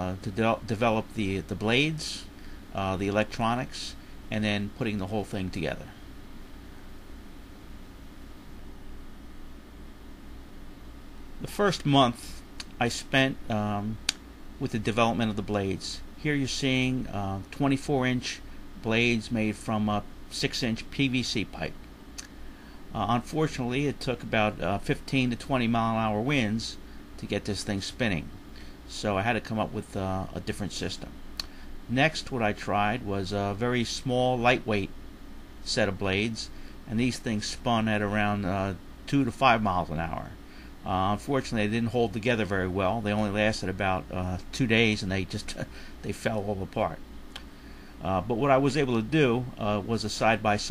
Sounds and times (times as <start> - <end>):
Speech: 0.0 - 6.0, 11.4 - 14.0, 14.6 - 21.8, 23.0 - 31.2, 31.9 - 34.9, 35.6 - 47.0, 48.0 - 50.7.